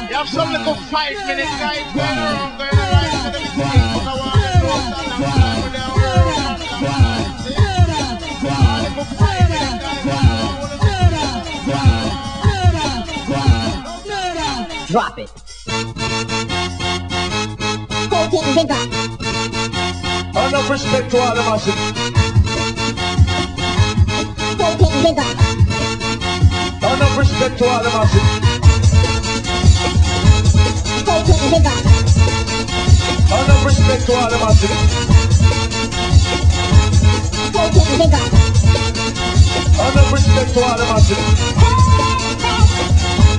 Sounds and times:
Speech: 0.0s - 8.2s, 13.9s - 15.4s, 18.1s - 18.8s, 20.4s - 21.8s, 24.6s - 25.4s, 37.6s - 38.3s
Music: 0.0s - 43.3s.

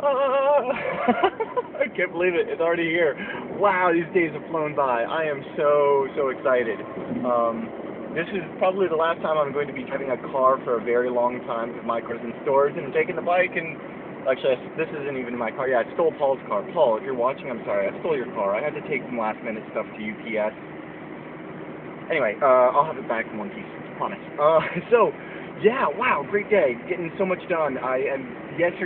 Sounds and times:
Car: 0.0s - 28.8s
Speech: 1.8s - 20.6s, 22.1s - 28.8s.

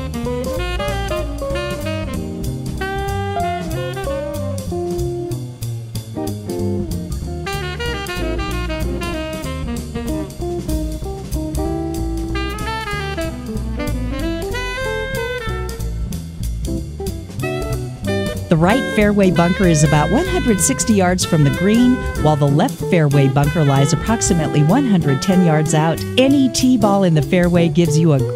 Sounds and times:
Jazz: 0.0s - 28.3s.

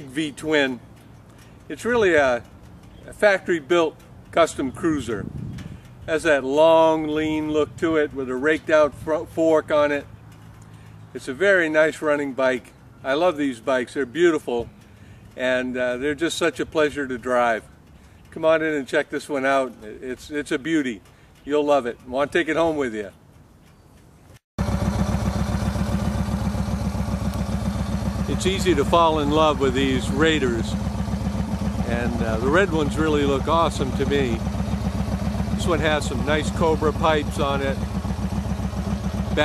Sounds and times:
Speech: 0.0s - 0.8s, 1.7s - 2.4s, 3.1s - 5.3s, 6.1s - 10.1s, 11.2s - 14.7s, 15.4s - 17.7s, 18.3s - 23.2s, 28.3s - 30.8s, 31.8s - 34.4s, 35.6s - 37.9s.

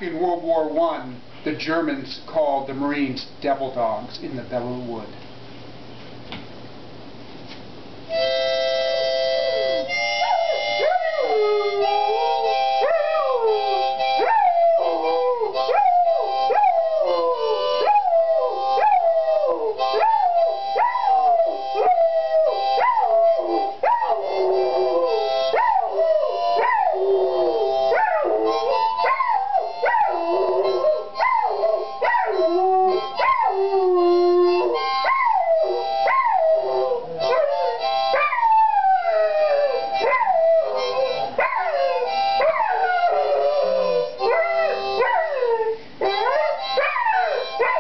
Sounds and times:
Music: 8.1s - 47.8s.

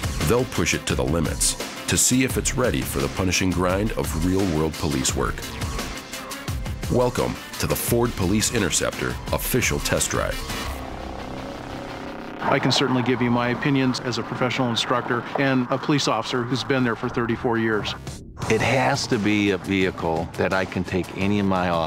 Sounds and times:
Music: 0.0s - 21.8s
Speech: 0.2s - 5.4s, 6.9s - 10.4s, 12.4s - 21.8s.

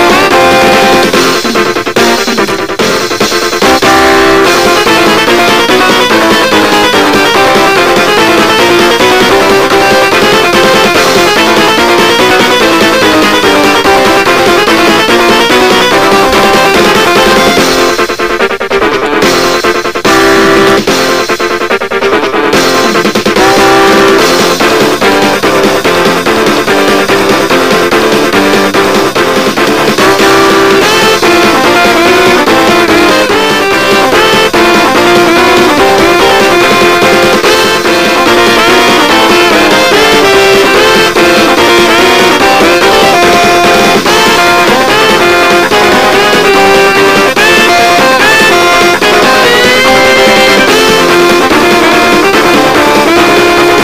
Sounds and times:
Music: 0.0s - 53.8s.

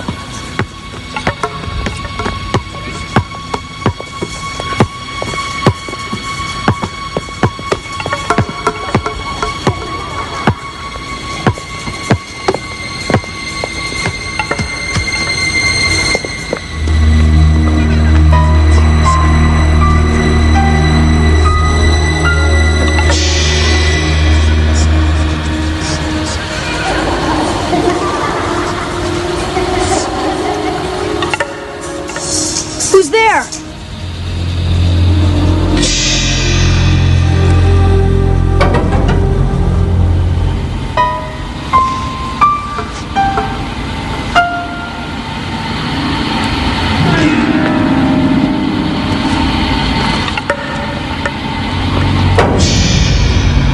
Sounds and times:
Music: 0.0s - 53.7s
Speech: 32.8s - 33.6s.

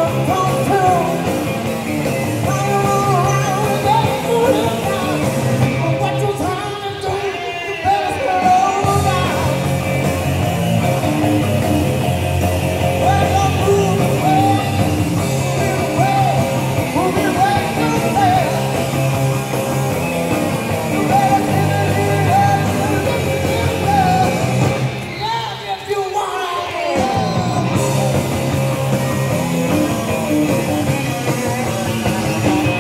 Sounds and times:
Blues: 0.0s - 32.8s
Country: 0.0s - 32.8s
Guitar: 0.0s - 32.8s.

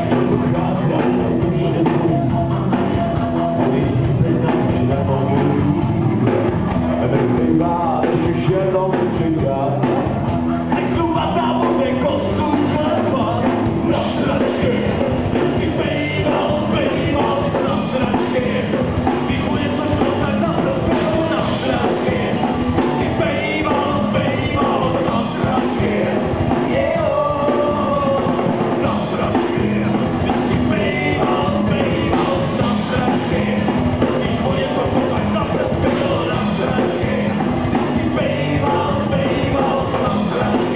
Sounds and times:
Inside, large room or hall: 0.0s - 40.7s
Music: 0.0s - 40.7s
Singing: 0.0s - 40.7s.

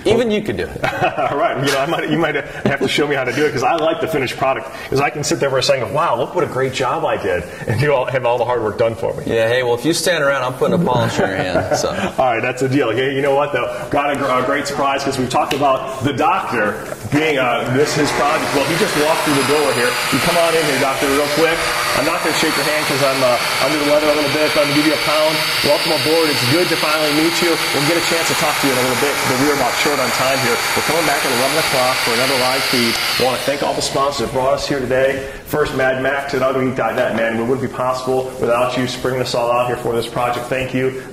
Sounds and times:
Power tool: 17.2s - 34.3s.

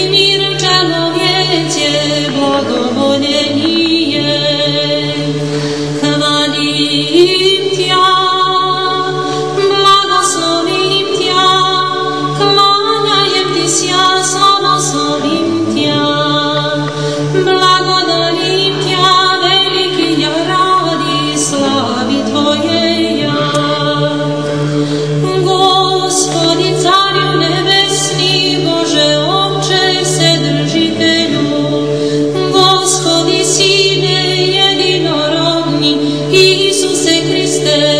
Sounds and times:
Music: 0.0s - 37.9s.

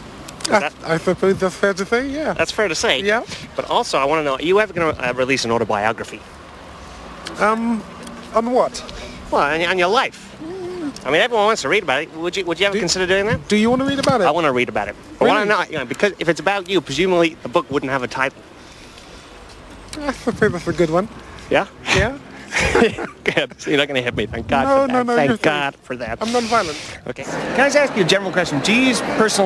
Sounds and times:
Outside, urban or manmade: 0.0s - 29.4s
Speech: 0.4s - 6.2s, 7.3s - 18.4s, 23.3s - 29.4s.

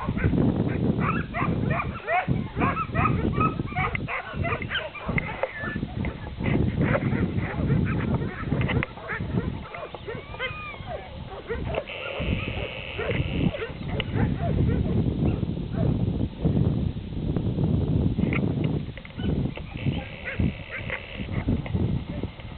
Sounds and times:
Dog: 0.0s - 15.9s, 20.0s - 21.4s
Outside, rural or natural: 0.0s - 22.5s.

